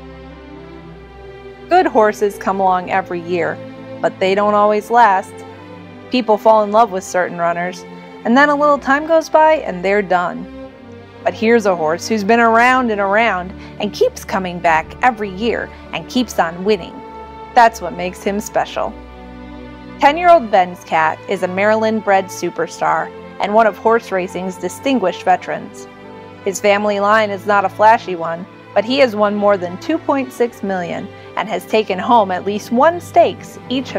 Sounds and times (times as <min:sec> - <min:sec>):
Music: 0:00.0 - 0:33.9
Speech: 0:01.7 - 0:05.3, 0:06.2 - 0:10.5, 0:11.3 - 0:17.0, 0:17.6 - 0:18.9, 0:20.0 - 0:25.8, 0:26.5 - 0:33.9.